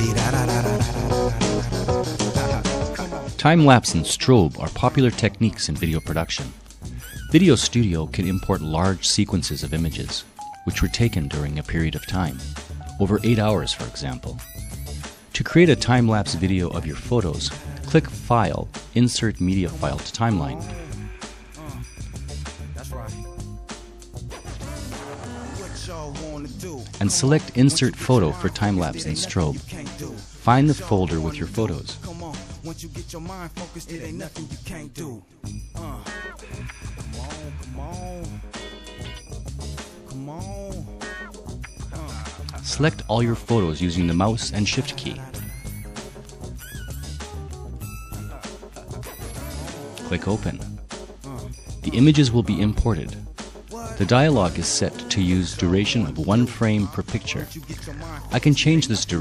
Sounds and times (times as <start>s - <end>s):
Music: 0.0s - 59.2s
Speech: 3.4s - 6.6s, 7.3s - 14.4s, 15.3s - 21.0s, 25.6s - 35.2s, 41.9s - 45.4s, 50.0s - 50.8s, 51.8s - 53.2s, 53.9s - 59.2s.